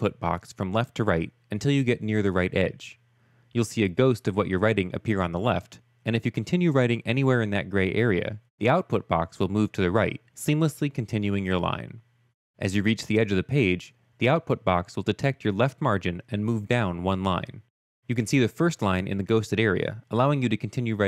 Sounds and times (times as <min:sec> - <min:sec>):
Speech: 0:00.0 - 0:03.0, 0:03.6 - 0:12.0, 0:12.6 - 0:21.0.